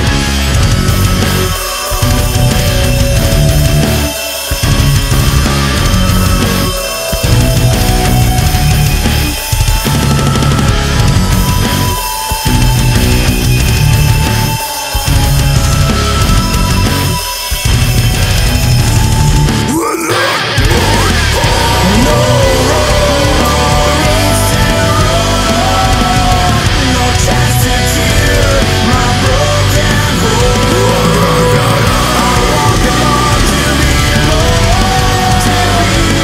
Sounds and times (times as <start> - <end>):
Music: 0.0 - 36.2.